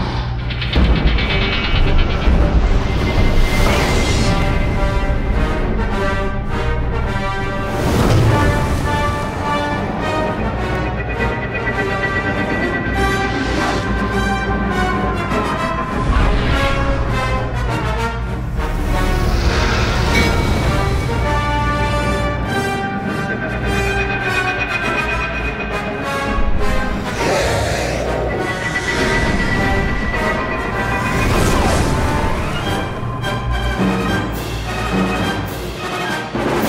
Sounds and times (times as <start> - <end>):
Music: 0.0 - 36.6.